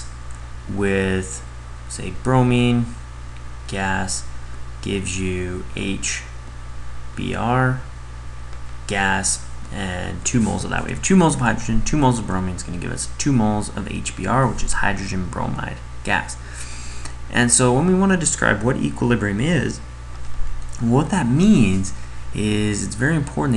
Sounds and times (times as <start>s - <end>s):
Speech: 0.7s - 3.0s, 3.7s - 6.4s, 7.2s - 7.9s, 8.9s - 16.4s, 17.3s - 19.9s, 20.8s - 23.5s.